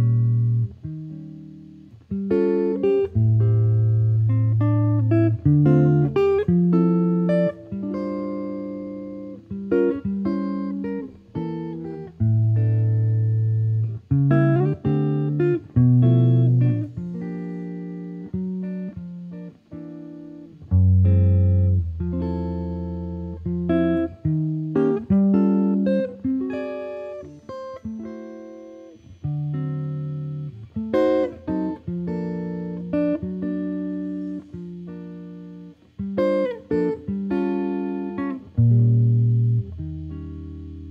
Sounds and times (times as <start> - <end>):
Guitar: 0.0 - 40.9
Jazz: 0.0 - 40.9.